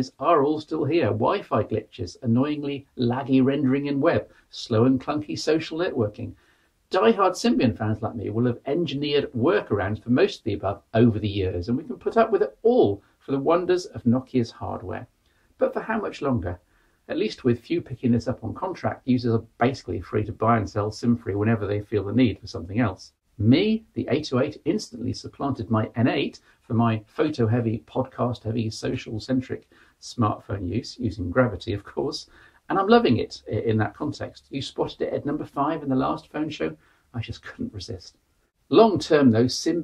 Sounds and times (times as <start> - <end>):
Speech: 0.0 - 39.8.